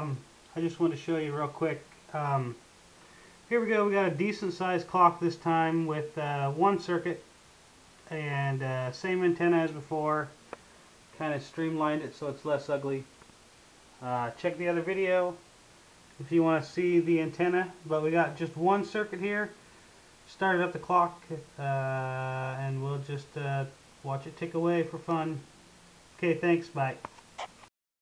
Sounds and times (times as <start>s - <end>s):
Speech: 0.0s - 2.6s, 3.5s - 7.3s, 8.1s - 10.4s, 11.1s - 13.1s, 14.0s - 15.4s, 16.2s - 19.6s, 20.3s - 25.5s, 26.2s - 27.0s.